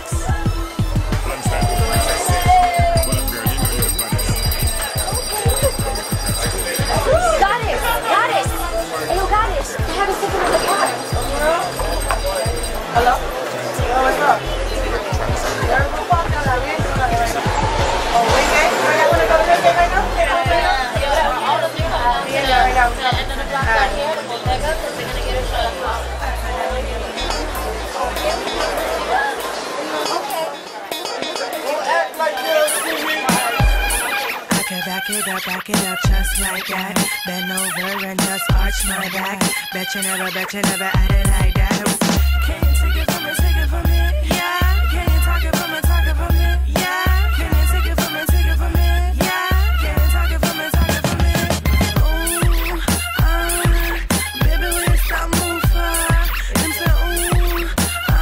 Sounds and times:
Music: 0:00.0 - 0:58.2.

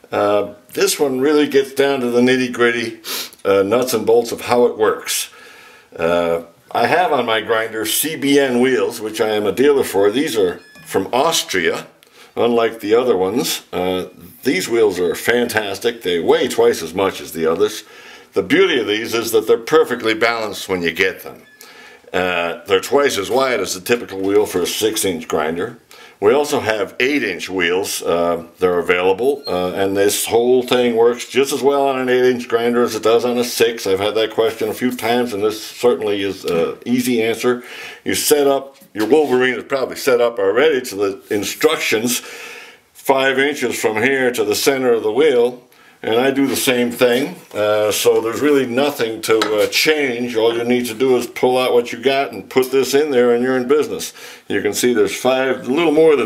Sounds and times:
Speech: 0:00.0 - 0:21.5, 0:22.1 - 0:42.3, 0:43.0 - 0:56.2.

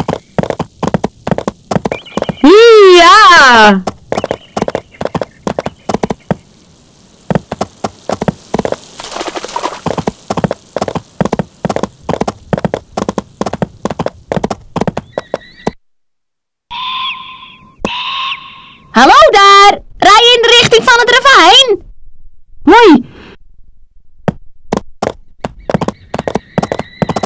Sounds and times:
Clip-clop: 0:00.0 - 0:06.4, 0:07.3 - 0:15.8, 0:24.7 - 0:27.2.

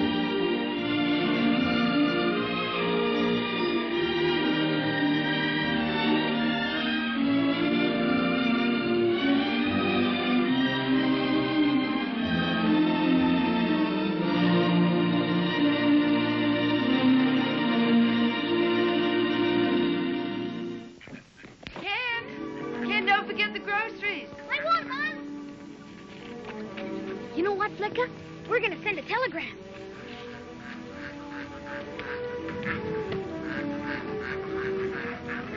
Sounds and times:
Music: 0:00.0 - 0:21.1, 0:21.7 - 0:35.5
Speech: 0:27.4 - 0:29.6.

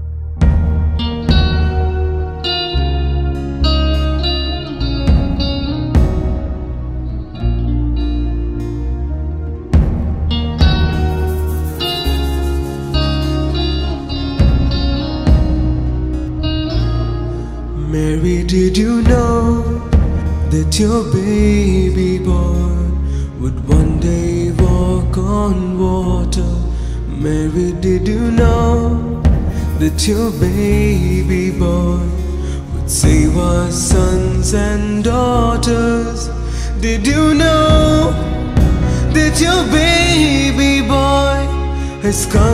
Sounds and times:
Guitar: 0:00.0 - 0:42.5.

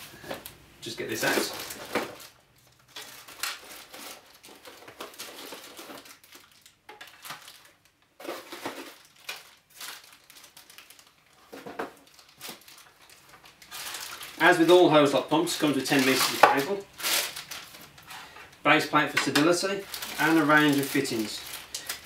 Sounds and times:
Speech: 0:00.8 - 0:01.6, 0:14.4 - 0:16.9, 0:18.6 - 0:21.5.

